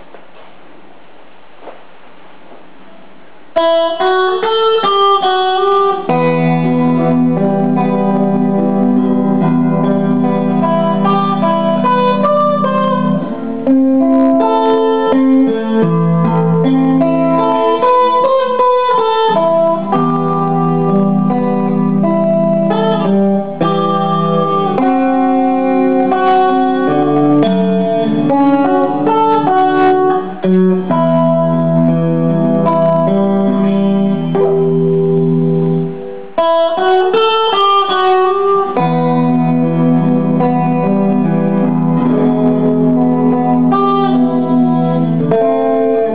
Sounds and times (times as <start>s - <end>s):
Electric guitar: 0.0s - 46.1s.